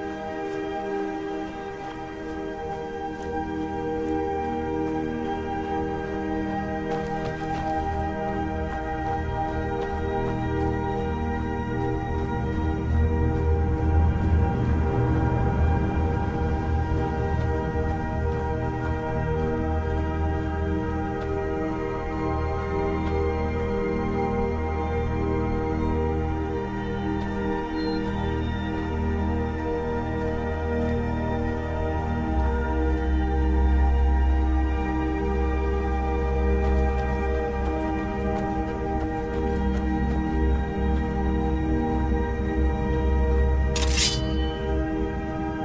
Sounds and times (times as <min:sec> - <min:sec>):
Music: 0:00.0 - 0:45.6.